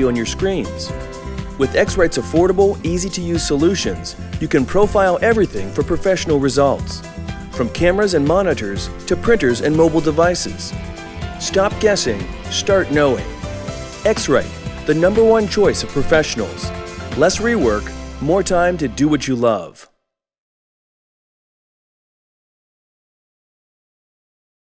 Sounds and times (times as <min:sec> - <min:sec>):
Speech: 0:00.0 - 0:01.0, 0:01.6 - 0:07.0, 0:07.6 - 0:10.7, 0:11.4 - 0:13.3, 0:14.0 - 0:19.9
Music: 0:00.0 - 0:20.0.